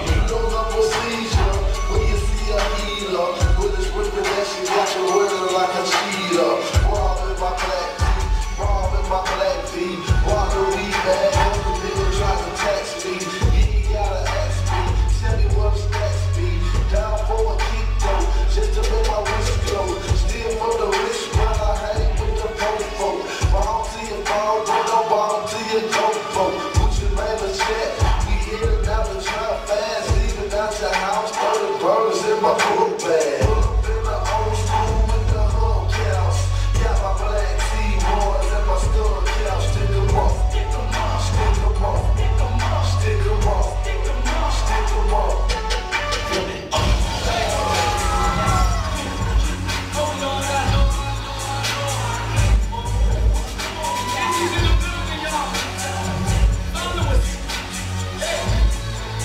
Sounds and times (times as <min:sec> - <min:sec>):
Music: 0:00.0 - 0:59.2.